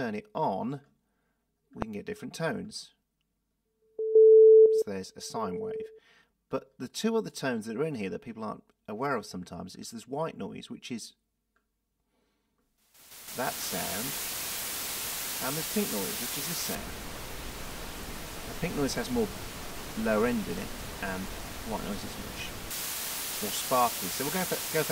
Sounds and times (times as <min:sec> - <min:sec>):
Speech: 0:00.0 - 0:00.9, 0:01.8 - 0:03.0, 0:04.8 - 0:05.9, 0:06.5 - 0:11.2, 0:13.4 - 0:14.1, 0:15.4 - 0:16.8, 0:18.6 - 0:19.3, 0:20.0 - 0:22.5, 0:23.4 - 0:24.9.